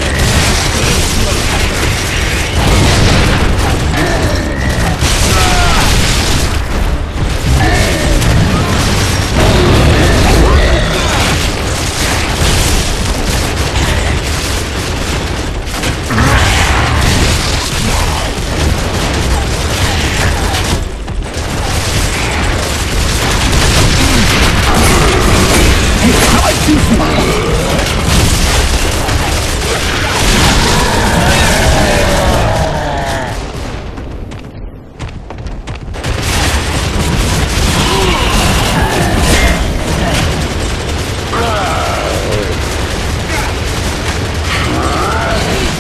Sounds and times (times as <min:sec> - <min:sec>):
Speech: 0:24.7 - 0:27.9, 0:41.3 - 0:42.6.